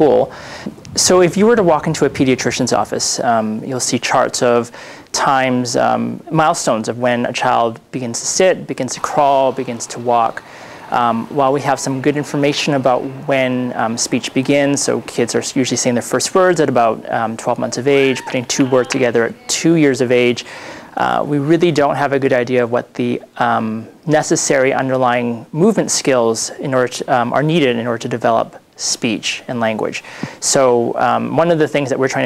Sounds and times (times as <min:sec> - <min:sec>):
Male speech, man speaking: 0:00.0 - 0:00.3, 0:01.0 - 0:32.2.